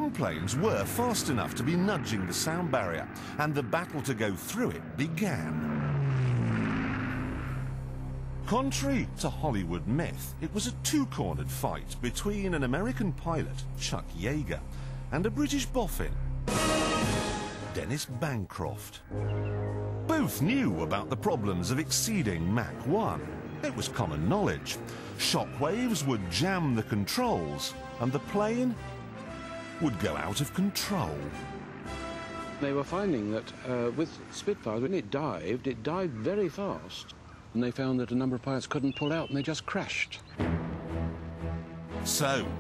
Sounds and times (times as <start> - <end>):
Speech: 0.0 - 5.6, 8.5 - 16.2, 17.8 - 19.0, 20.1 - 28.8, 29.8 - 31.3, 32.6 - 40.3, 42.1 - 42.6
Music: 7.6 - 34.4, 40.4 - 42.6.